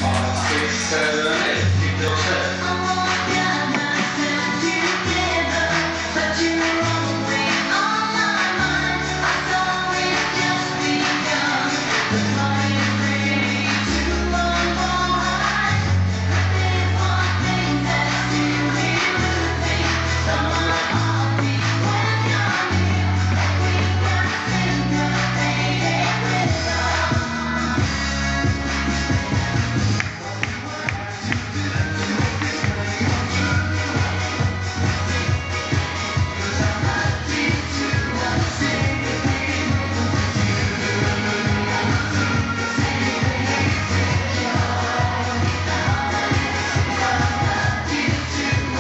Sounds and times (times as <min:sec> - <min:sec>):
Music: 0:00.0 - 0:48.8.